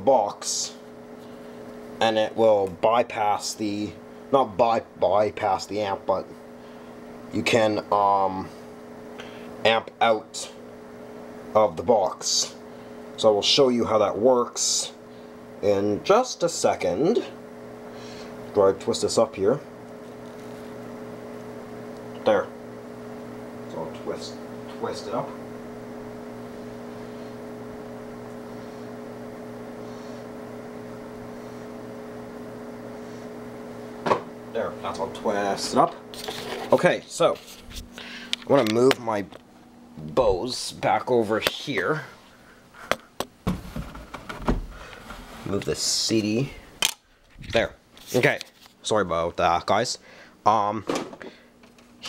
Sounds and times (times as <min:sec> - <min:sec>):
Speech: 0:00.0 - 0:00.8, 0:02.0 - 0:06.3, 0:07.3 - 0:08.5, 0:09.6 - 0:10.6, 0:11.6 - 0:12.6, 0:13.2 - 0:15.0, 0:15.6 - 0:17.4, 0:18.5 - 0:19.7, 0:22.2 - 0:22.5, 0:23.7 - 0:25.4, 0:34.5 - 0:36.0, 0:36.7 - 0:37.4, 0:38.5 - 0:39.4, 0:40.0 - 0:42.2, 0:45.4 - 0:46.6, 0:47.5 - 0:50.9.